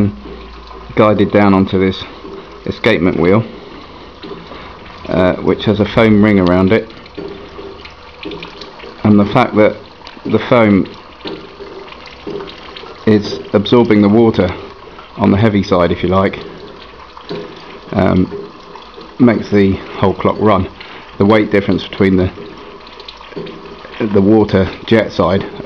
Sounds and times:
Speech: 0.9s - 3.5s, 5.1s - 6.9s, 9.0s - 11.0s, 13.0s - 14.6s, 15.2s - 16.4s, 17.9s - 18.4s, 19.2s - 22.4s, 24.0s - 25.6s.

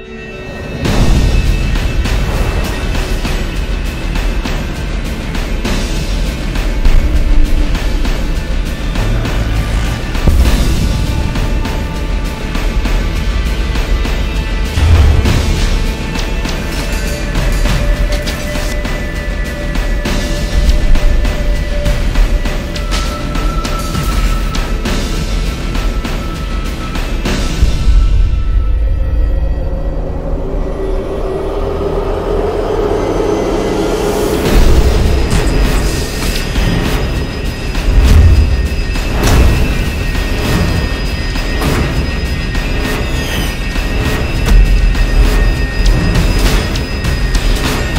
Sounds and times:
Music: 0.0s - 47.9s.

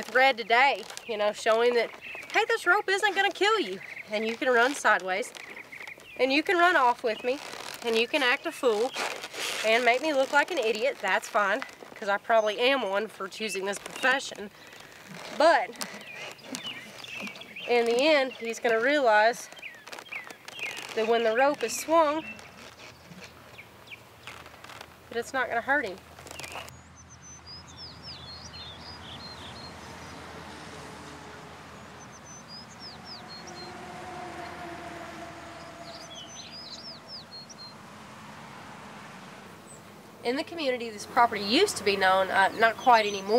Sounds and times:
Speech: 0.0s - 5.3s, 6.2s - 8.9s, 9.6s - 14.5s, 15.3s - 15.8s, 17.7s - 19.5s, 21.0s - 22.3s, 25.1s - 26.0s, 40.2s - 43.3s
Outside, rural or natural: 0.0s - 43.3s.

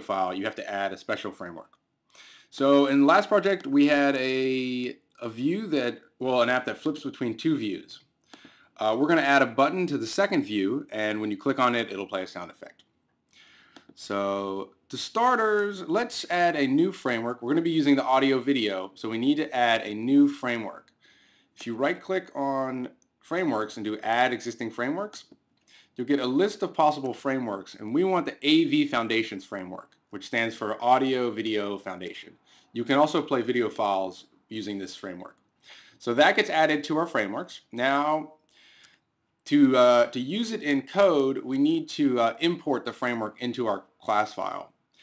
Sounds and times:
Speech: 0.0s - 1.7s, 2.5s - 8.0s, 8.8s - 12.8s, 13.9s - 20.9s, 21.6s - 25.4s, 26.0s - 35.4s, 36.0s - 38.4s, 39.5s - 44.7s.

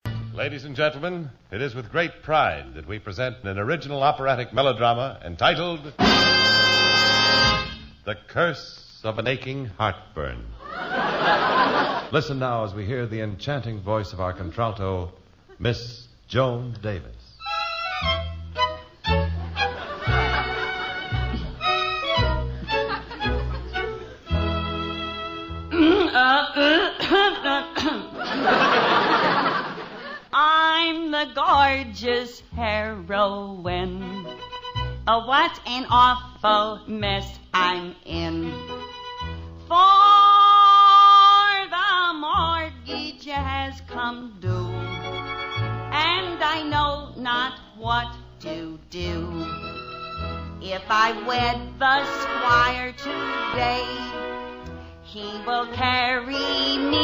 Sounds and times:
Music: 0.0s - 0.6s, 5.5s - 8.1s, 17.4s - 29.1s, 30.4s - 57.0s.

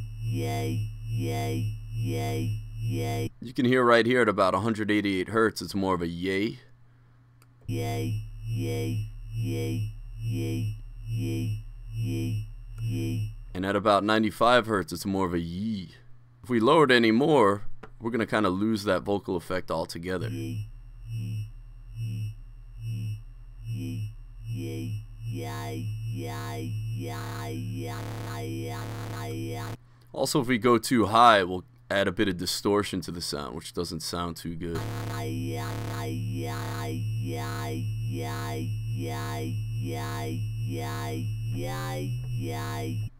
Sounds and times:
Sampler: 0.0s - 3.3s, 7.7s - 13.8s, 20.2s - 29.8s, 34.8s - 43.1s
Speech: 0.4s - 6.7s, 7.7s - 9.8s, 13.0s - 20.4s, 25.4s - 43.1s
Electronic music: 7.7s - 10.6s, 23.7s - 29.8s, 34.8s - 43.1s.

